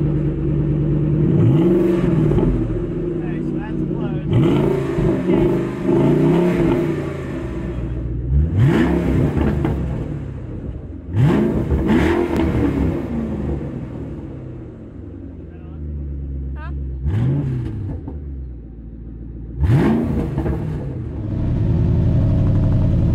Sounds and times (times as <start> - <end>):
Car: 0.0 - 23.1
Accelerating, revving, vroom: 1.2 - 2.7, 4.3 - 10.3, 11.1 - 14.1, 17.0 - 18.2, 19.6 - 23.1
Speech: 3.2 - 4.4, 15.4 - 15.9, 16.5 - 16.8.